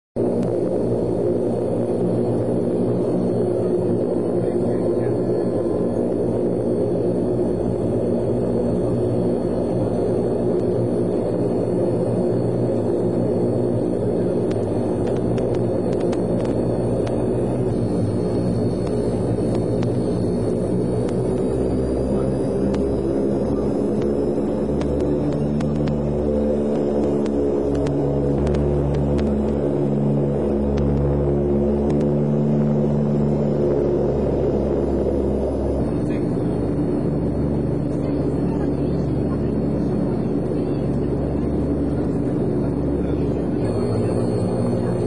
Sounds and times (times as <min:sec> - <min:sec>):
Fixed-wing aircraft, airplane: 0:00.0 - 0:45.0.